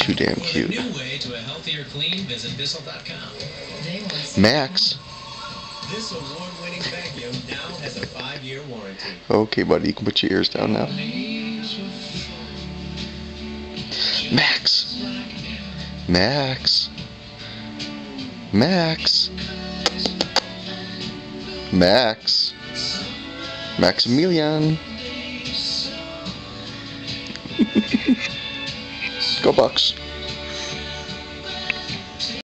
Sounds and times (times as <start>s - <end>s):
Speech: 0.0s - 5.0s, 5.9s - 11.0s, 14.3s - 15.0s, 16.1s - 17.0s, 18.5s - 19.3s, 21.8s - 22.6s, 23.8s - 24.8s, 29.2s - 30.0s
Music: 0.0s - 32.4s.